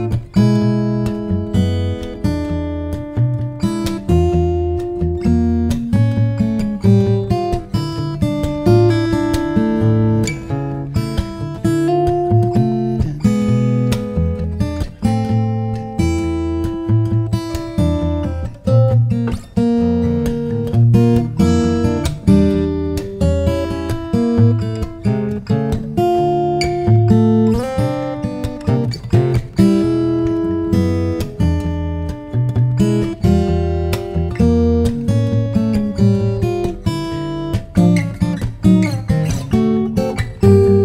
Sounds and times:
Guitar: 0.0s - 40.8s.

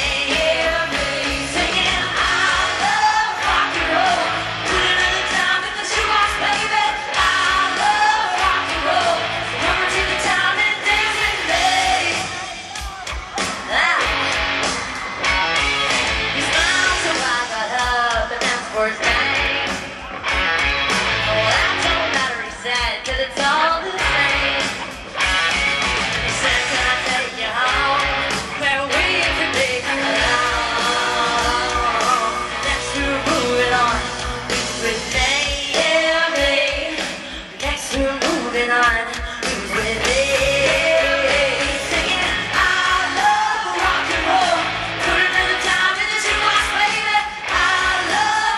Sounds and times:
Rock and roll: 0.0s - 48.5s.

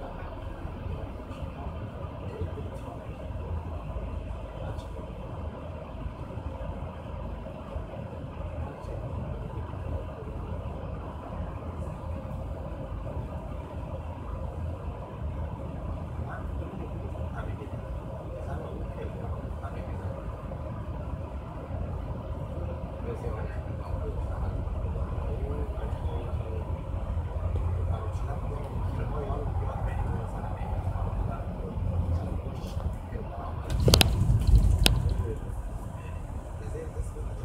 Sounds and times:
Speech: 0.0s - 5.5s, 8.3s - 10.9s, 16.0s - 20.6s, 22.5s - 34.1s, 34.8s - 37.4s
Vehicle: 0.0s - 37.4s.

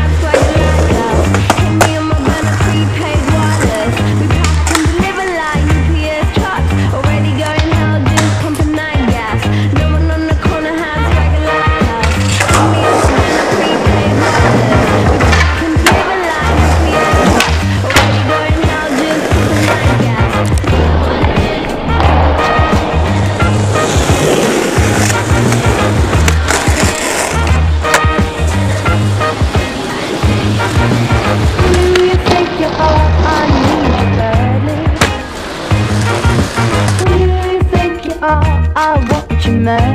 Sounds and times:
Skateboard: 0.0s - 38.1s
Music: 0.0s - 39.9s.

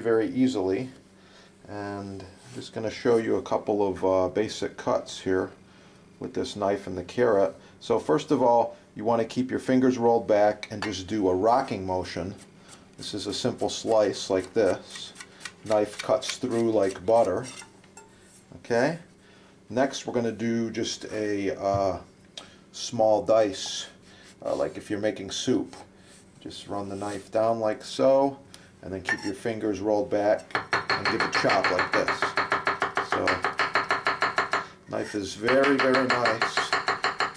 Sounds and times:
Speech: 0.0s - 1.0s, 1.7s - 5.6s, 6.2s - 12.4s, 13.0s - 17.6s, 18.5s - 19.1s, 19.7s - 22.1s, 22.8s - 32.4s, 33.0s - 33.5s, 34.9s - 36.8s.

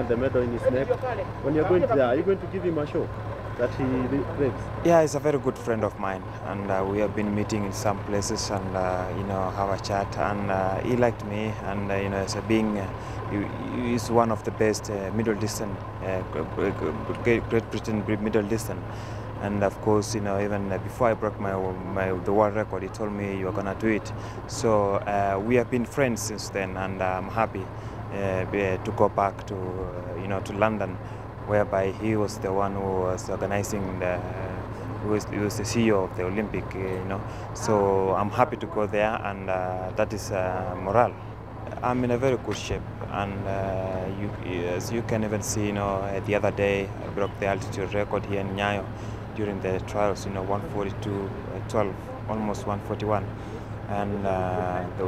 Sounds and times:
Speech: 0.0s - 53.3s, 53.9s - 55.0s.

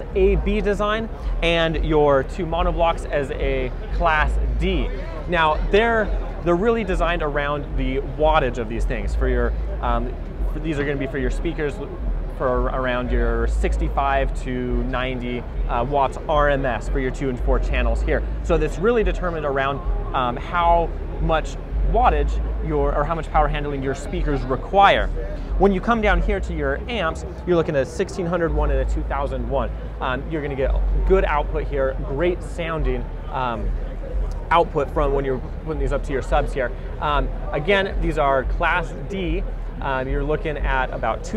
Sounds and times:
Speech: 0.0s - 41.3s.

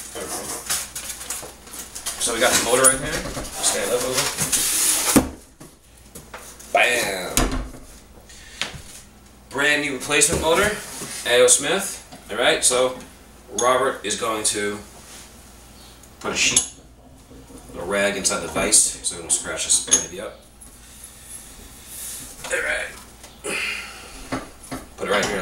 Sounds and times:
Speech: 2.2s - 4.4s, 6.7s - 7.5s, 9.5s - 14.9s, 16.2s - 16.7s, 17.7s - 20.4s, 22.5s - 23.0s, 25.0s - 25.4s.

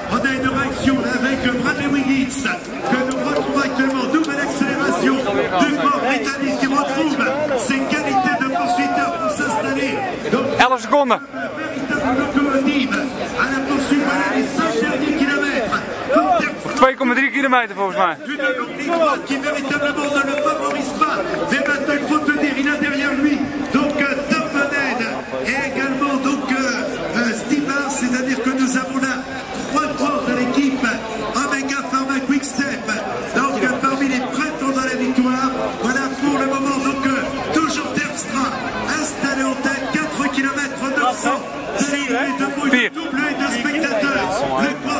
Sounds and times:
Speech: 0.0s - 44.9s.

